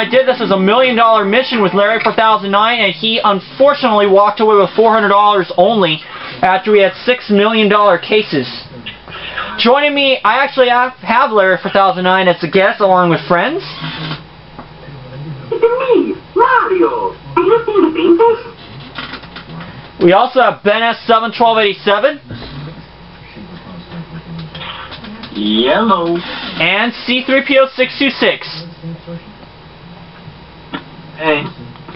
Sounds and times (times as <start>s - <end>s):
Speech: 0.0s - 14.2s, 14.8s - 31.9s.